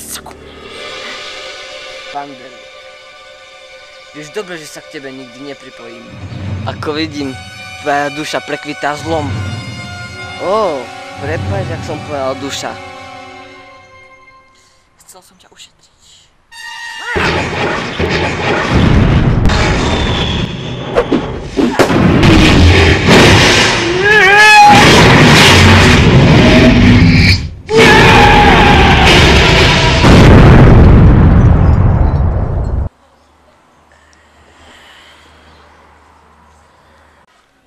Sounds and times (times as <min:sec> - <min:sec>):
Music: 0:00.0 - 0:15.0, 0:16.5 - 0:17.3
Boom: 0:17.2 - 0:32.9.